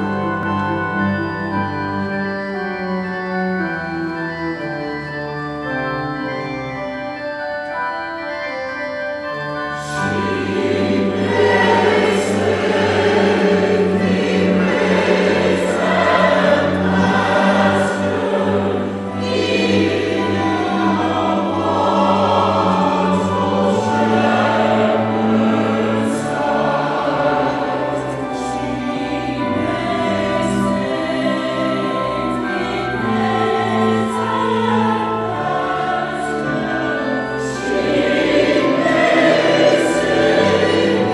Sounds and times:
Choir: 0:09.8 - 0:41.1.

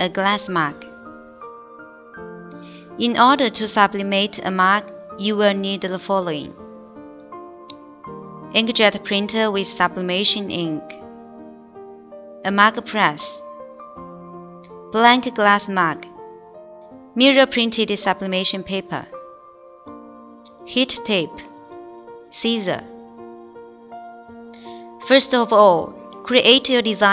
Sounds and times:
Speech: 0:00.0 - 0:00.8, 0:03.0 - 0:06.6, 0:08.6 - 0:11.0, 0:12.5 - 0:13.4, 0:15.0 - 0:16.1, 0:17.2 - 0:19.1, 0:20.7 - 0:21.5, 0:22.4 - 0:22.8, 0:25.1 - 0:27.1
Music: 0:00.0 - 0:27.1.

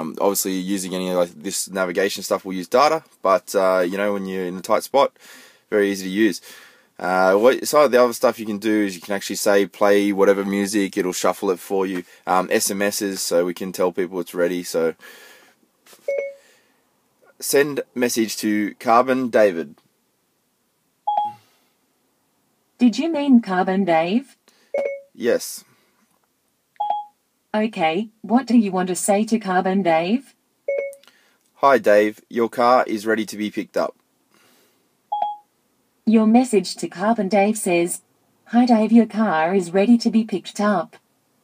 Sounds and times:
Speech: 0:00.0 - 0:05.1, 0:05.7 - 0:06.4, 0:07.0 - 0:15.0, 0:17.3 - 0:19.8, 0:22.8 - 0:24.4, 0:25.2 - 0:25.7, 0:27.6 - 0:30.3, 0:31.6 - 0:34.0, 0:36.1 - 0:41.0.

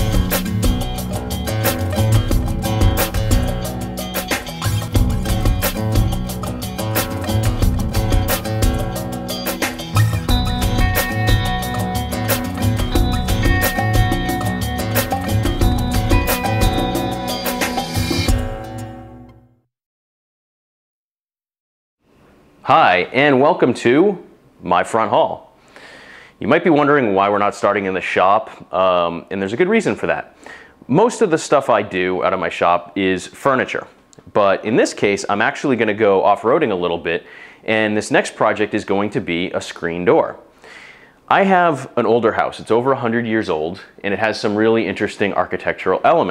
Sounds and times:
Speech: 0:22.7 - 0:25.5, 0:26.4 - 0:30.3, 0:30.9 - 0:40.4, 0:41.3 - 0:46.3.

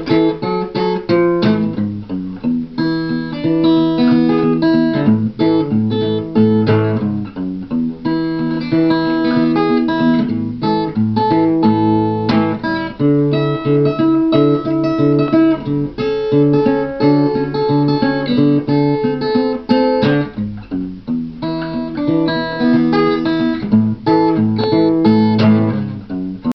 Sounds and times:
Acoustic guitar: 0:00.0 - 0:26.5
Strum: 0:00.0 - 0:26.5.

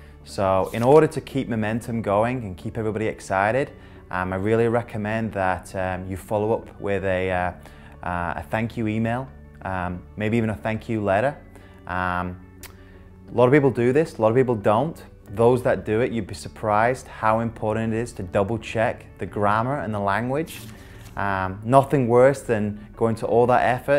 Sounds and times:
Music: 0:00.0 - 0:23.9
Speech: 0:00.3 - 0:12.4, 0:13.3 - 0:23.9.

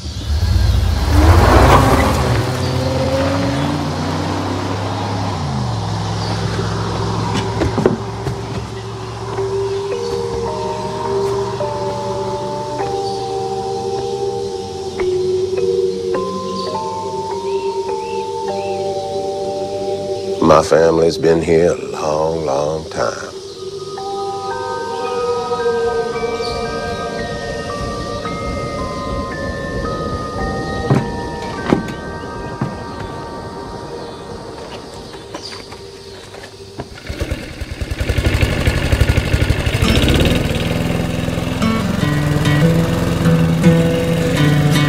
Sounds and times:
Singing bowl: 0:08.7 - 0:20.4, 0:23.3 - 0:36.2.

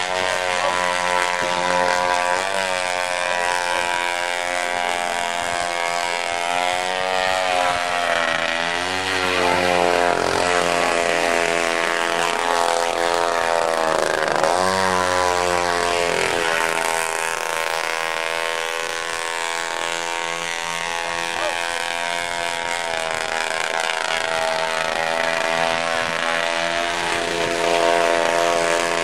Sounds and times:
Motorboat, speedboat: 0:00.0 - 0:29.0.

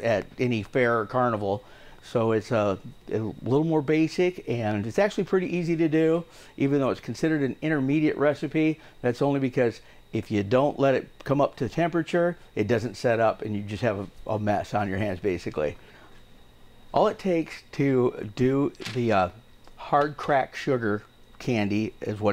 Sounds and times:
Speech: 0:00.0 - 0:15.8, 0:17.0 - 0:22.3.

